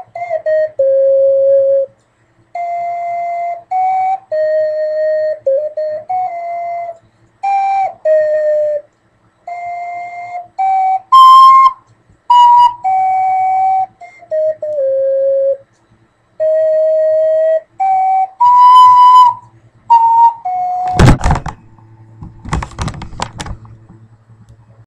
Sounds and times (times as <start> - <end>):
Music: 0.0 - 15.7, 16.4 - 21.2.